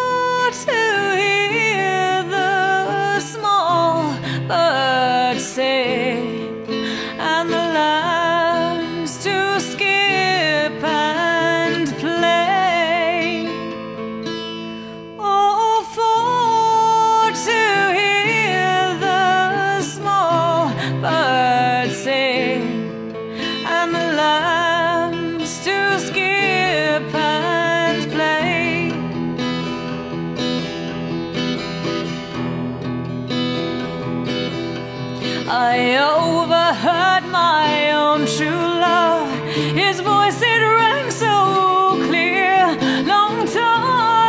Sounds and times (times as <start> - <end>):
Acoustic guitar: 0.0 - 44.2.